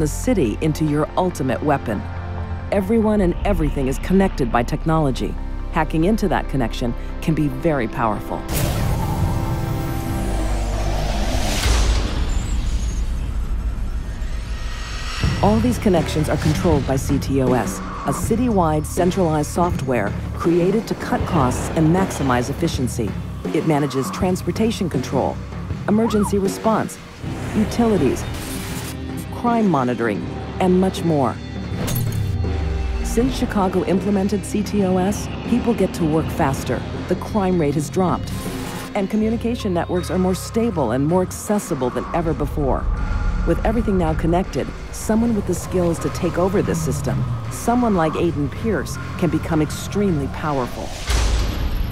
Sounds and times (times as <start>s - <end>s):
Speech: 0.0s - 2.0s, 2.7s - 8.5s, 15.4s - 28.3s, 29.2s - 31.4s, 33.1s - 38.4s, 39.0s - 42.9s, 43.5s - 51.0s
Music: 0.0s - 51.9s.